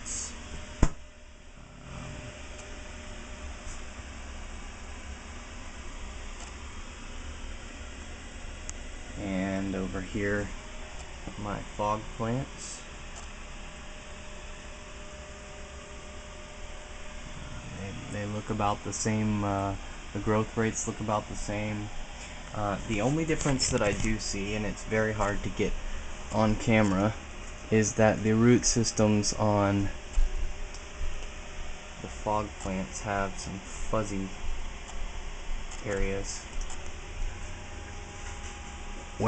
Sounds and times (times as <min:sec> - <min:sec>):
Speech: 0:09.2 - 0:10.6, 0:11.3 - 0:12.9, 0:17.6 - 0:21.9, 0:22.5 - 0:30.0, 0:32.0 - 0:34.4, 0:35.8 - 0:36.5.